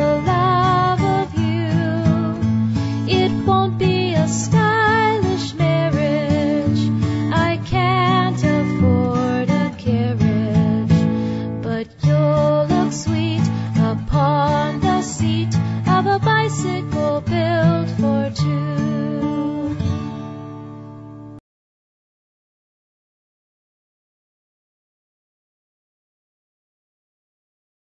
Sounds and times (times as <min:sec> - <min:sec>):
Music: 0:00.0 - 0:21.4.